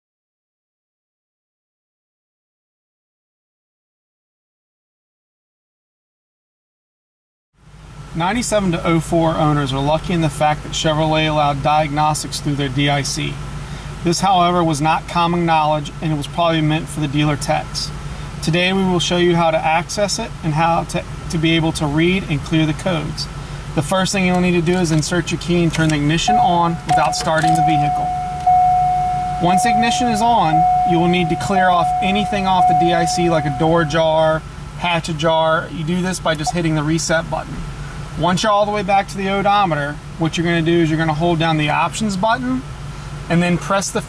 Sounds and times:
Car: 7.6 - 44.0
Speech: 8.2 - 13.4, 14.0 - 28.1, 29.4 - 42.7, 43.3 - 44.0.

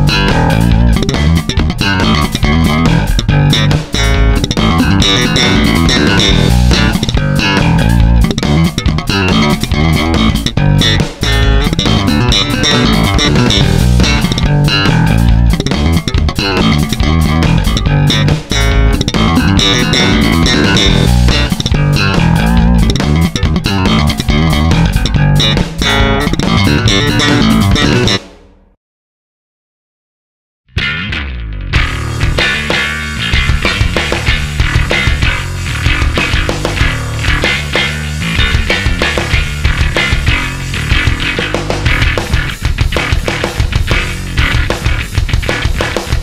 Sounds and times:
Electric guitar: 0.0 - 28.3, 30.8 - 46.2.

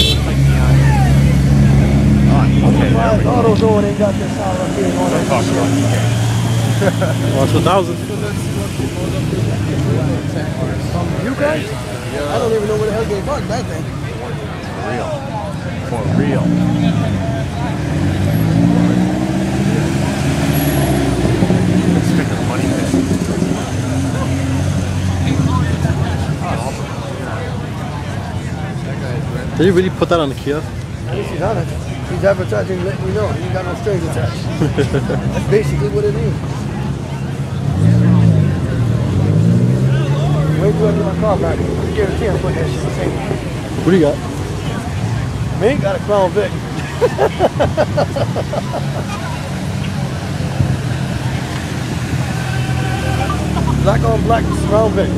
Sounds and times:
Speech: 0.0 - 20.2, 21.8 - 47.6, 52.2 - 55.1.

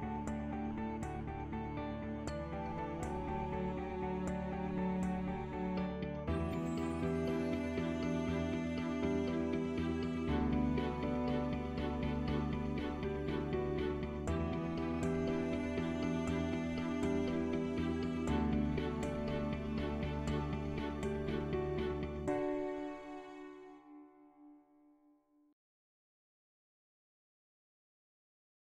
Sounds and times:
Music: 0.0 - 25.6.

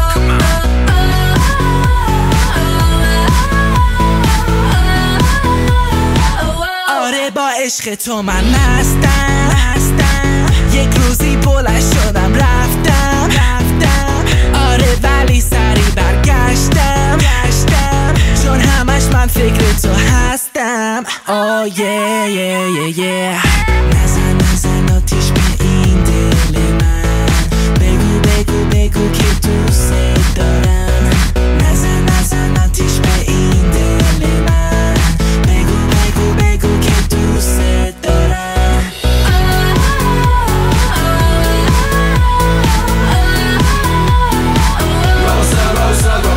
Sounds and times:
Pop music: 0.0 - 46.3
Rock and roll: 8.4 - 20.3, 23.5 - 37.5, 39.0 - 46.3.

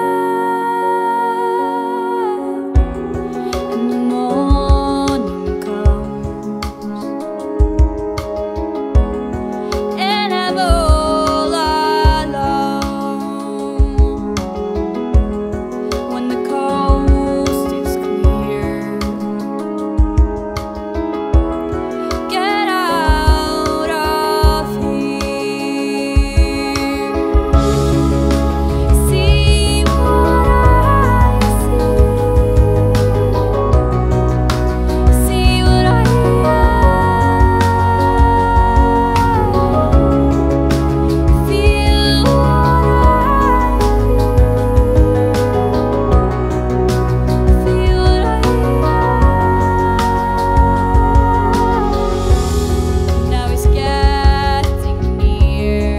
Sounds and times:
Independent music: 0.0 - 55.9.

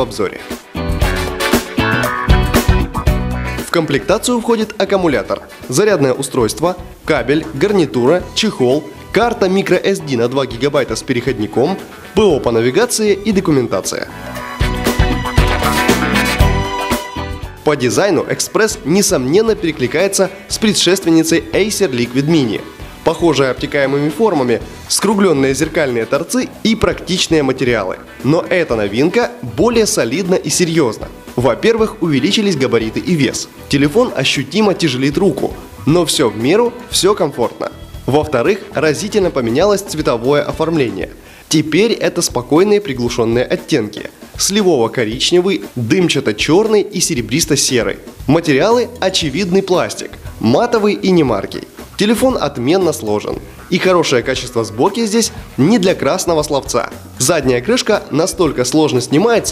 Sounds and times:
Speech: 0.0 - 0.6, 3.6 - 14.1, 17.6 - 59.5
Music: 0.0 - 59.5.

